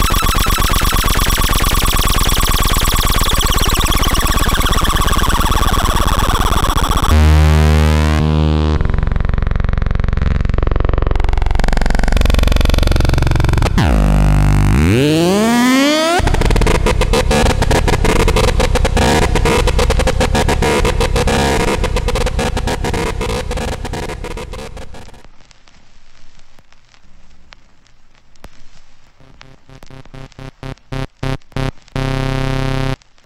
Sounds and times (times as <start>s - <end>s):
Synthesizer: 11.7s - 25.2s.